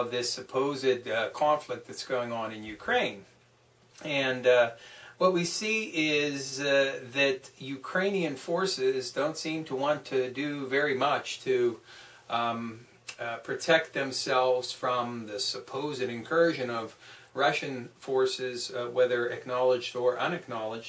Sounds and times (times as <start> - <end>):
Speech: 0.0 - 3.3, 4.0 - 20.8.